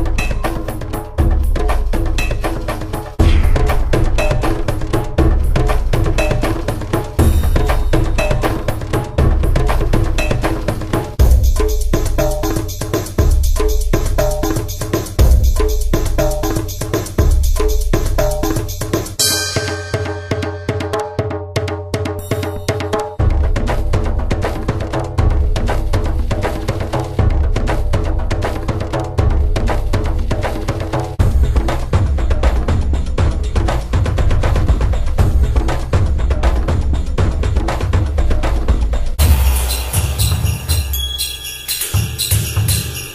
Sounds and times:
Percussion: 0:00.0 - 0:43.1.

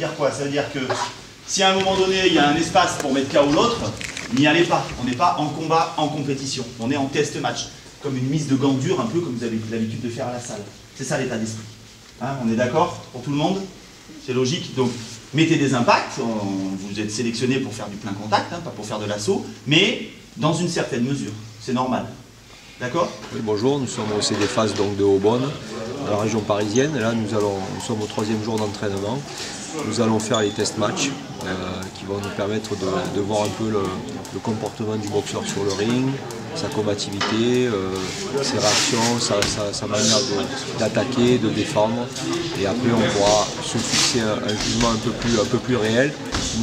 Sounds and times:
Speech: 0:00.0 - 0:22.2, 0:22.8 - 0:46.6.

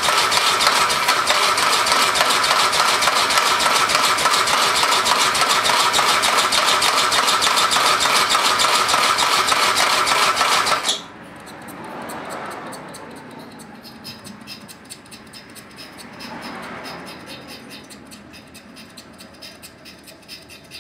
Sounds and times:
Engine: 0:00.0 - 0:20.8.

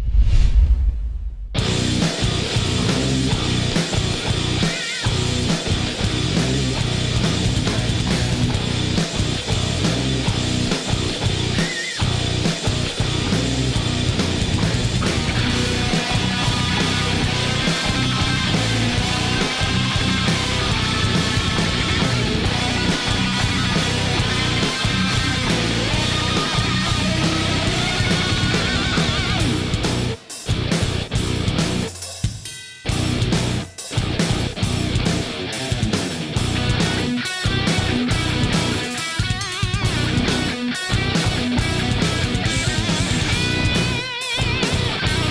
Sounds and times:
Music: 0:01.6 - 0:45.3.

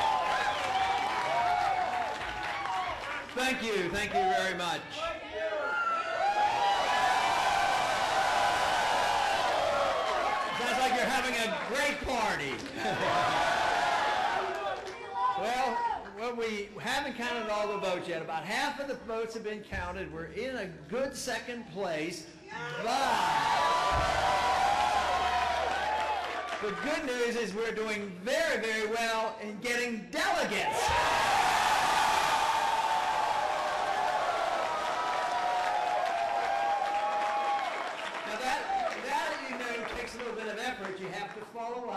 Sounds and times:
Male speech, man speaking: 0:03.4 - 0:05.6, 0:10.6 - 0:12.7, 0:15.4 - 0:23.4, 0:26.6 - 0:30.8, 0:38.3 - 0:41.9.

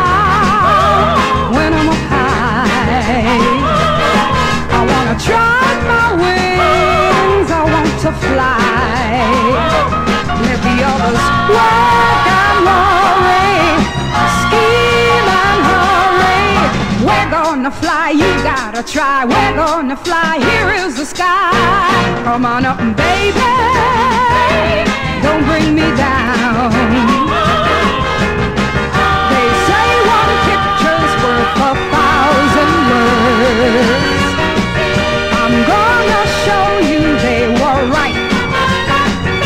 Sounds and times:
Swing music: 0:00.0 - 0:39.4.

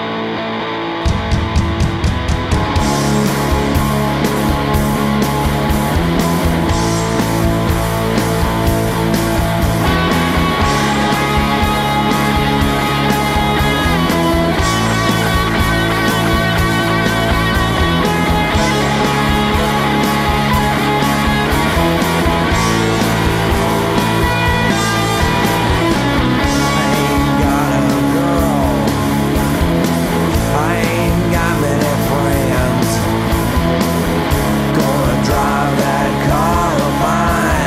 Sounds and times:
Music: 0:00.0 - 0:37.6.

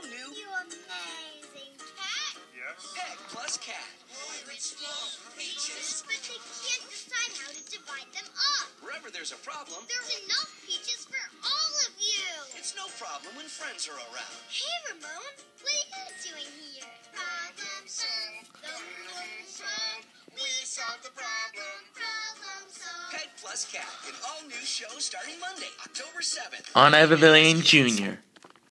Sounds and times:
Music: 0:00.0 - 0:28.2
Speech: 0:26.8 - 0:28.2.

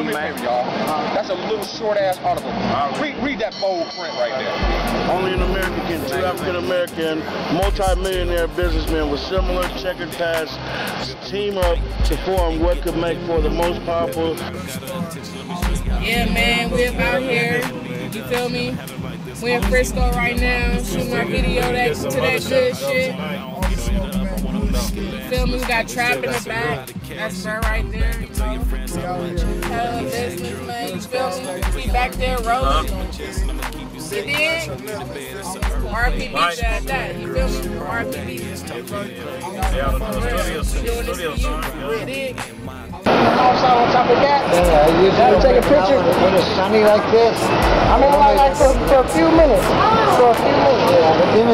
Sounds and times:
Music: 0:00.0 - 0:51.5
Speech: 0:00.0 - 0:51.5.

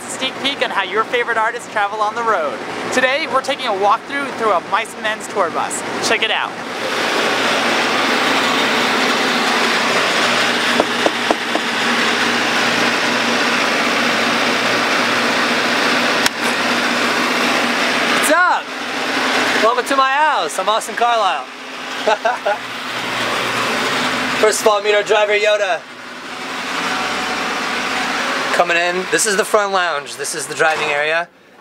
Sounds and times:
Speech: 0:00.0 - 0:06.6, 0:18.2 - 0:18.7, 0:19.6 - 0:21.5, 0:24.4 - 0:25.8, 0:28.5 - 0:31.3.

